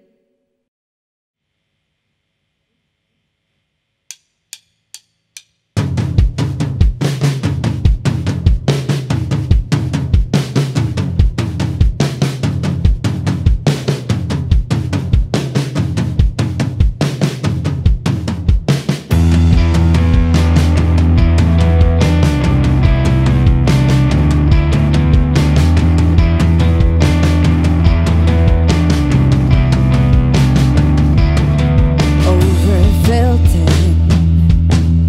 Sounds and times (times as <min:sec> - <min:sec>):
Music: 0:04.1 - 0:35.0.